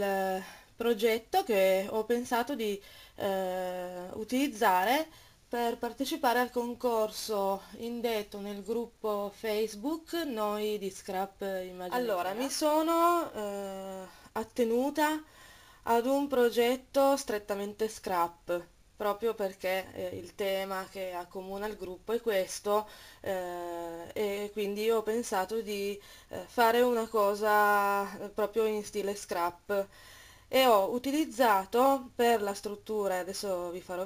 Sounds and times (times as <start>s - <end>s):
Speech: 0.0s - 15.2s, 15.9s - 29.9s, 30.5s - 34.0s.